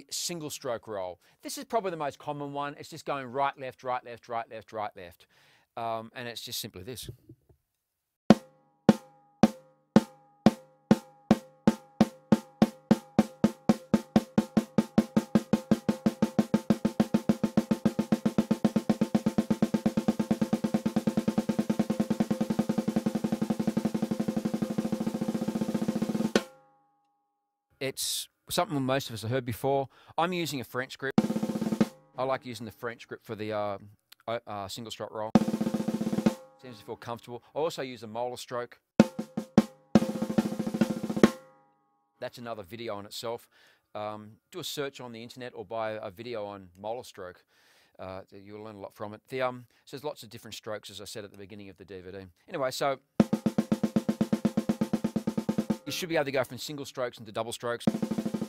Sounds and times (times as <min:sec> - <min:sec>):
Speech: 0:00.0 - 0:07.2, 0:27.8 - 0:31.2, 0:32.2 - 0:35.4, 0:36.6 - 0:38.8, 0:42.2 - 0:53.0, 0:55.9 - 0:57.9
Drum: 0:08.3 - 0:26.6, 0:31.2 - 0:32.1, 0:35.4 - 0:36.7, 0:39.0 - 0:41.5, 0:53.2 - 0:56.2, 0:57.9 - 0:58.4
Drum kit: 0:08.3 - 0:26.6, 0:31.2 - 0:32.0, 0:35.3 - 0:36.8, 0:39.0 - 0:41.5, 0:53.2 - 0:56.2, 0:57.8 - 0:58.4.